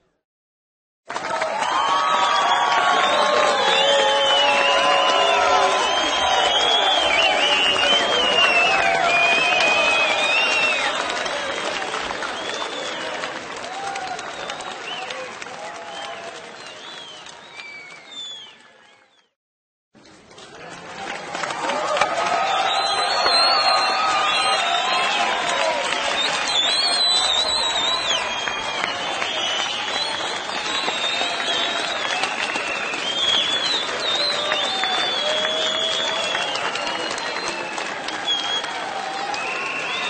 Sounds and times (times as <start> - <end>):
Whistling: 2.0 - 13.3, 14.1 - 19.4, 22.5 - 40.1.